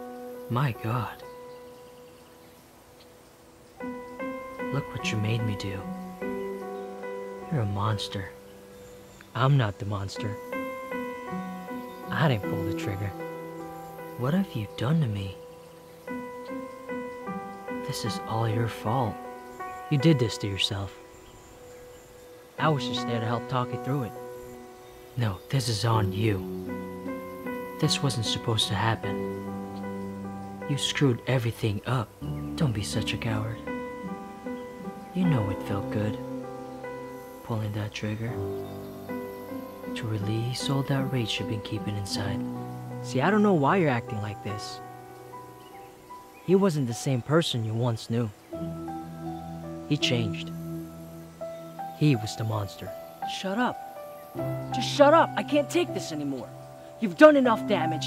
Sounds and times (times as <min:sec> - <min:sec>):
Music: 0:00.0 - 0:58.0
Speech: 0:00.5 - 0:01.2, 0:04.7 - 0:05.9, 0:07.5 - 0:08.4, 0:09.4 - 0:10.4, 0:12.1 - 0:13.2, 0:14.2 - 0:15.4, 0:17.8 - 0:19.2, 0:19.9 - 0:21.0, 0:22.6 - 0:24.2, 0:25.2 - 0:26.5, 0:27.8 - 0:29.2, 0:30.7 - 0:33.6, 0:35.2 - 0:36.2, 0:37.5 - 0:38.6, 0:40.0 - 0:44.8, 0:46.5 - 0:48.4, 0:49.9 - 0:50.5, 0:52.0 - 0:53.8, 0:54.8 - 0:58.0.